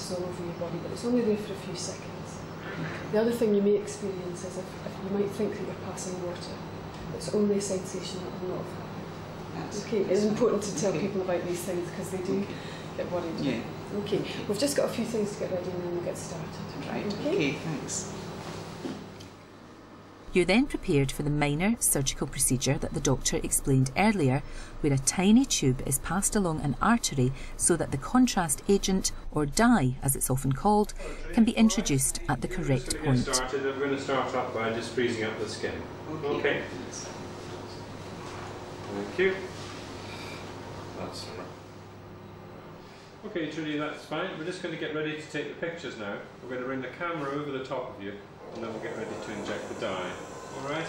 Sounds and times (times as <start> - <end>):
Narration, monologue: 0.0 - 50.8.